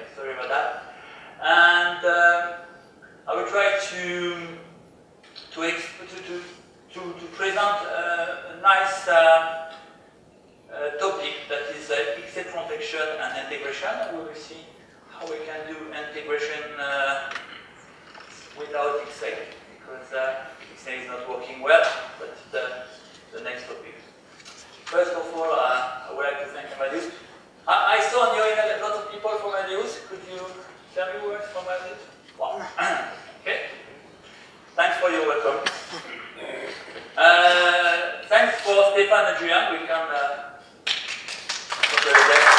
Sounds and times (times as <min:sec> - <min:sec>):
Speech: 0:00.0 - 0:00.8, 0:01.4 - 0:02.7, 0:03.3 - 0:04.7, 0:05.5 - 0:09.8, 0:10.7 - 0:17.4, 0:18.6 - 0:24.0, 0:24.9 - 0:33.9, 0:34.8 - 0:40.6, 0:41.8 - 0:42.5.